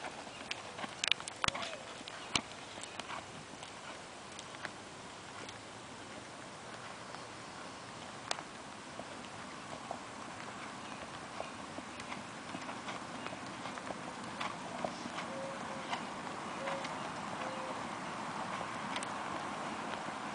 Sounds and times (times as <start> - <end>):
Clip-clop: 0.0 - 20.3.